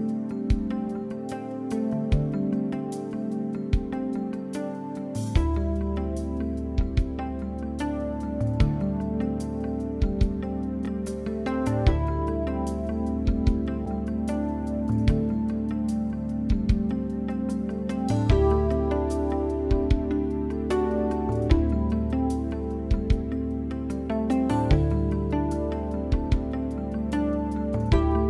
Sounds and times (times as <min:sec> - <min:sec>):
Music: 0:00.0 - 0:28.3.